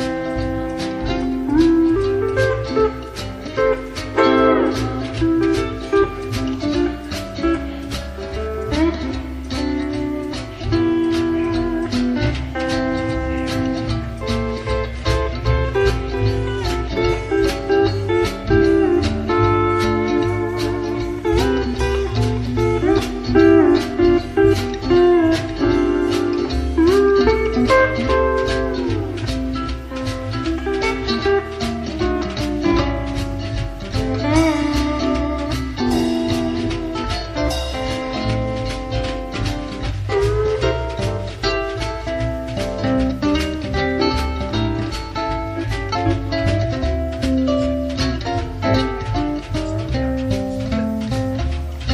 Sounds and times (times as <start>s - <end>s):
Strum: 0.0s - 51.9s.